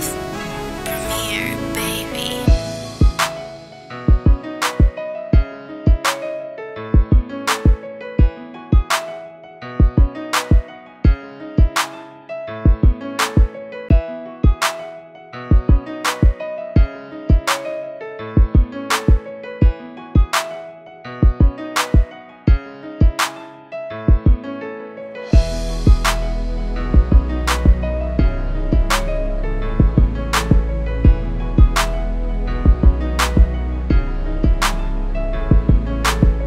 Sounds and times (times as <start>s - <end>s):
Music: 0.0s - 36.4s.